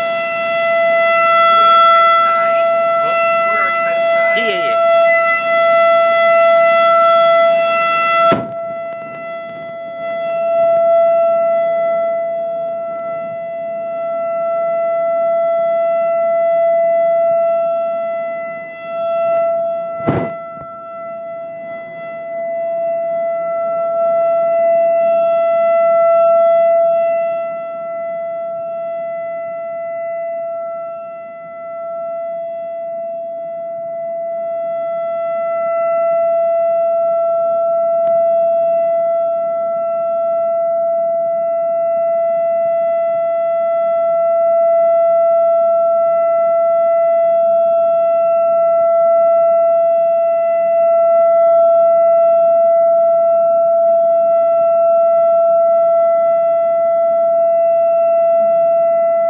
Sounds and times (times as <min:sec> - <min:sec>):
Siren: 0:00.0 - 0:59.3.